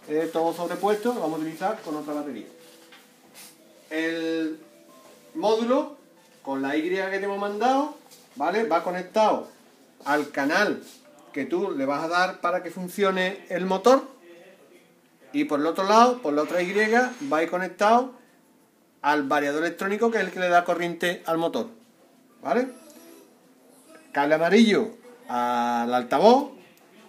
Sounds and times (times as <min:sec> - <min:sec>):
Speech: 0:00.0 - 0:02.5, 0:05.4 - 0:18.2, 0:19.0 - 0:21.8, 0:23.8 - 0:27.0
Music: 0:00.0 - 0:27.0.